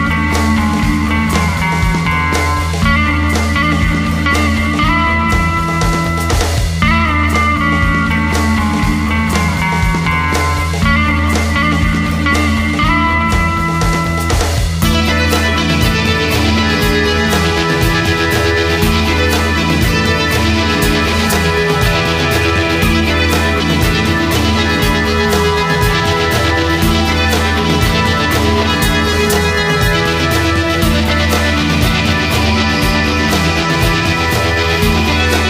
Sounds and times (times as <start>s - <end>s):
Music: 0.0s - 35.4s.